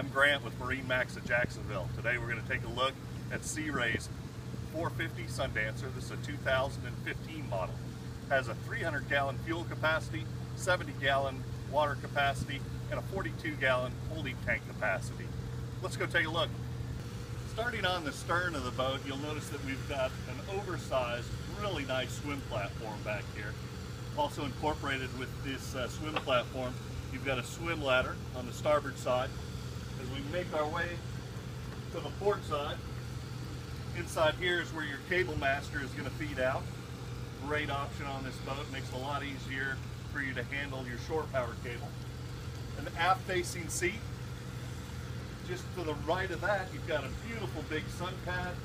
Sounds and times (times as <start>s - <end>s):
Speech: 0.0s - 4.1s, 4.7s - 16.6s, 17.5s - 23.6s, 24.2s - 29.3s, 30.0s - 31.1s, 31.9s - 32.8s, 33.9s - 36.7s, 37.4s - 42.0s, 42.8s - 44.1s, 45.4s - 48.6s.